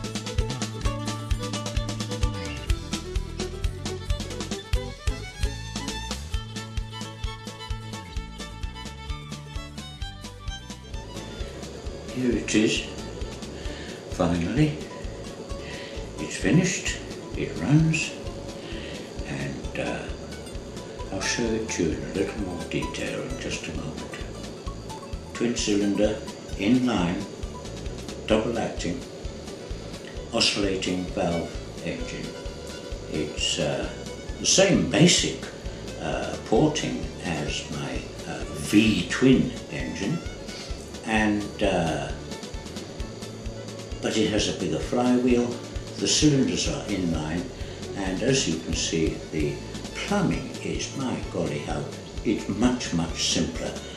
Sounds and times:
Music: 0.0s - 53.9s
Speech: 12.1s - 13.0s, 14.1s - 14.9s, 16.2s - 18.2s, 19.2s - 20.2s, 21.1s - 24.3s, 25.4s - 27.3s, 28.3s - 29.0s, 30.3s - 32.4s, 33.1s - 40.2s, 41.0s - 42.2s, 44.0s - 53.9s.

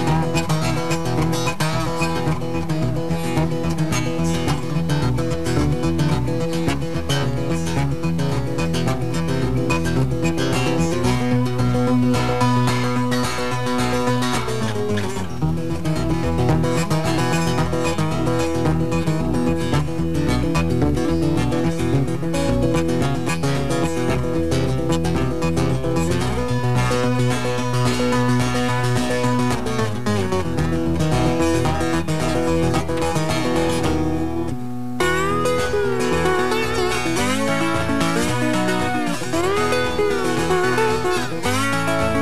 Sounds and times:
Acoustic guitar: 0.0s - 42.2s
Strum: 0.0s - 42.2s.

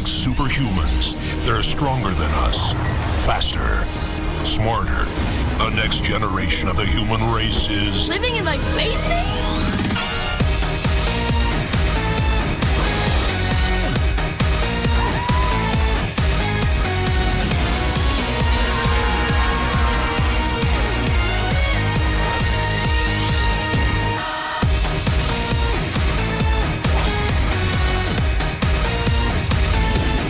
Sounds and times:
Music: 0.0s - 30.3s.

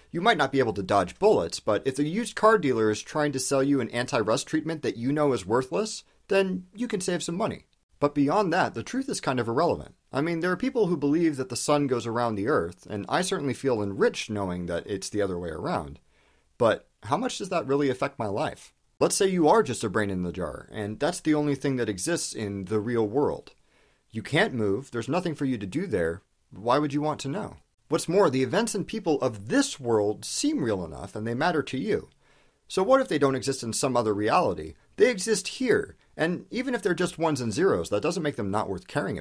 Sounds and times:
Speech: 0.1s - 16.0s, 16.6s - 39.2s.

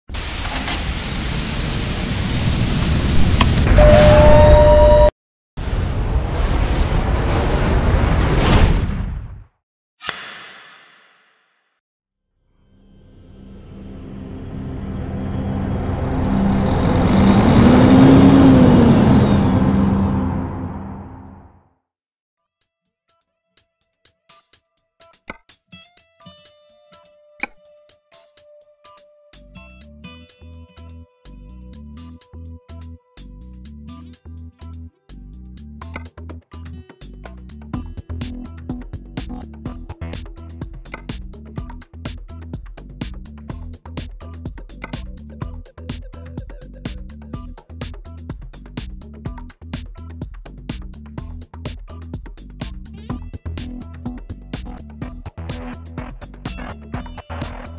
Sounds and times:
Music: 12.3s - 16.1s, 22.4s - 57.7s.

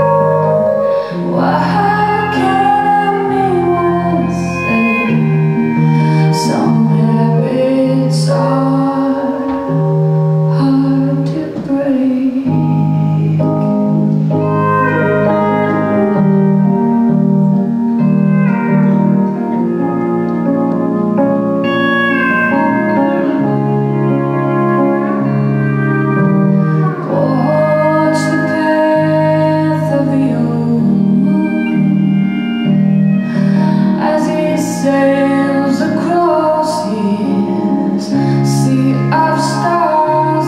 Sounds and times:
Music: 0.0s - 40.4s.

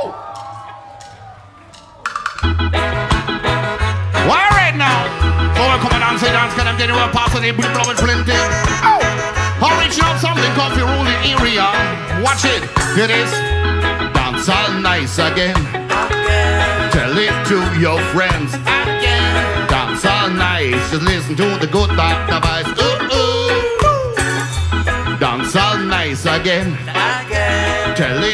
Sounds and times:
Music: 1.8s - 28.3s.

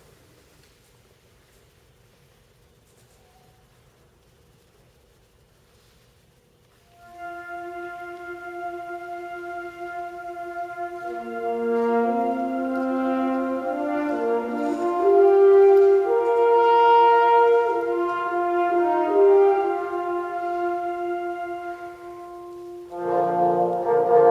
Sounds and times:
Orchestra: 6.6s - 24.3s.

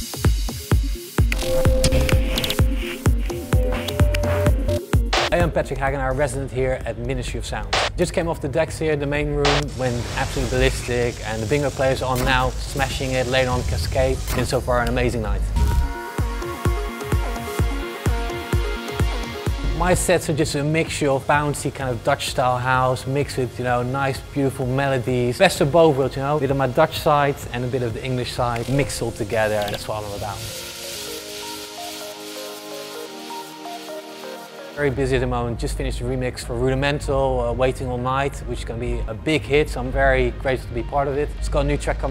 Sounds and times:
Music: 0.0s - 42.1s
Speech: 5.4s - 15.5s, 19.7s - 30.5s, 34.8s - 42.1s.

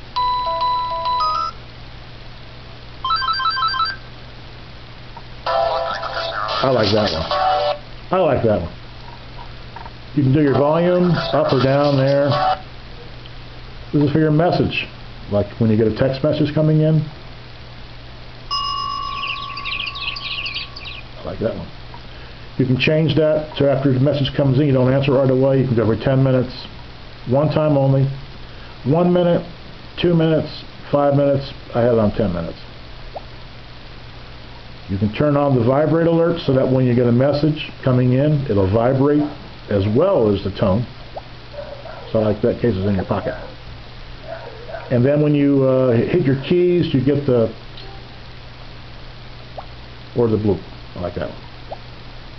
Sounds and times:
Music: 0.2s - 1.6s, 5.4s - 7.8s, 11.1s - 12.6s
Telephone: 3.0s - 4.0s
Speech: 5.8s - 7.4s, 8.1s - 8.8s, 10.2s - 12.6s, 13.9s - 17.2s, 21.2s - 21.8s, 22.6s - 28.2s, 28.9s - 32.7s, 34.9s - 40.9s, 42.1s - 43.5s, 44.9s - 47.6s, 50.2s - 51.4s.

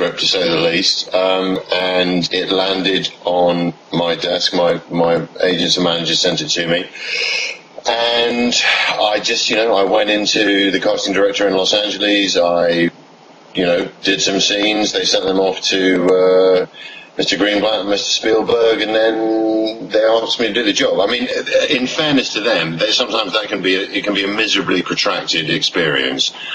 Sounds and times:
Speech: 0.0s - 12.9s, 13.6s - 26.5s.

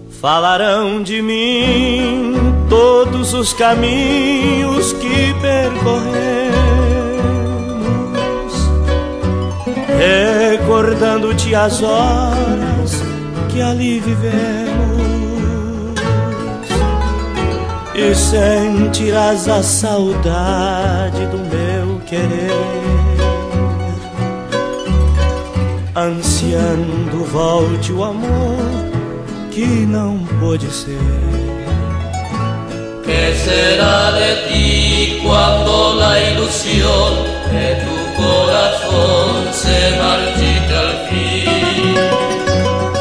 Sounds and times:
Vocal music: 0.0s - 24.6s, 25.4s - 31.9s, 32.7s - 43.0s.

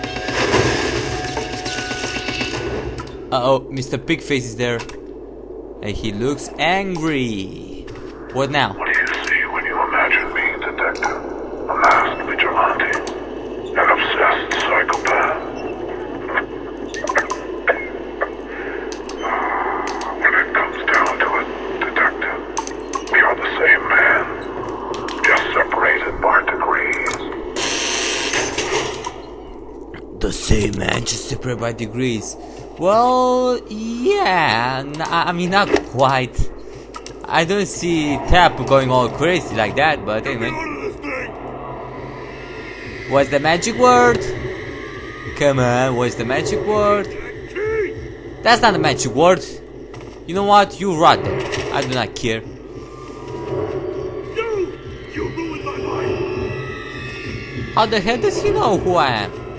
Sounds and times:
Speech: 3.3s - 4.9s, 5.8s - 11.2s, 30.2s - 36.5s, 37.2s - 41.2s, 43.1s - 44.3s, 45.4s - 47.9s, 48.5s - 49.6s, 50.3s - 52.5s, 57.8s - 59.3s.

